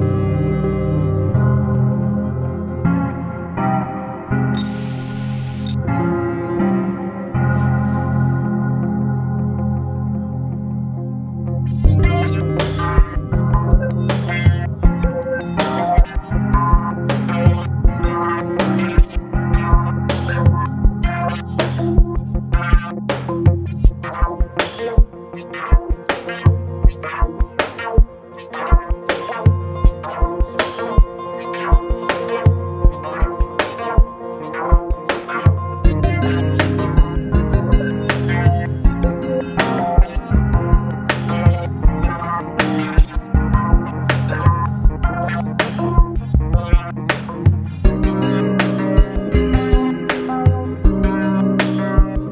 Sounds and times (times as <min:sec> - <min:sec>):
Music: 0:00.0 - 0:52.3.